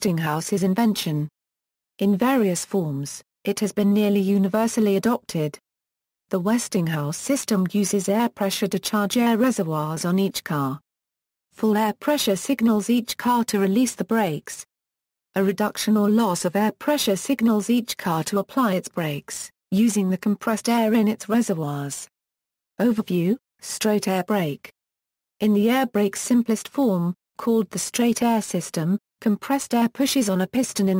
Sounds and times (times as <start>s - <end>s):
Speech: 0.0s - 1.3s, 2.0s - 5.6s, 6.3s - 10.8s, 11.6s - 14.7s, 15.4s - 22.1s, 22.8s - 24.7s, 25.4s - 30.9s.